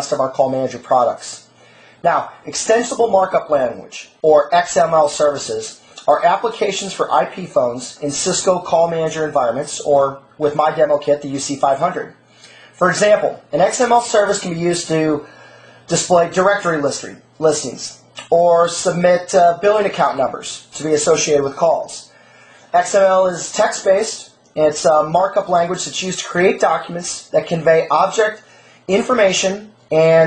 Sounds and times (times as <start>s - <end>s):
Speech: 0.0s - 12.2s, 12.8s - 15.3s, 15.9s - 22.1s, 22.7s - 30.2s.